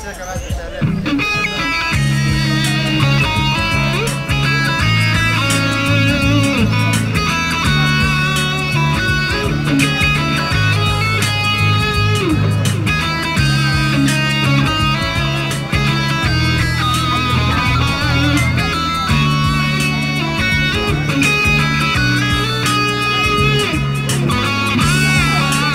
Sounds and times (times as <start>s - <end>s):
Electric guitar: 0.7s - 25.7s
Strum: 0.9s - 25.7s.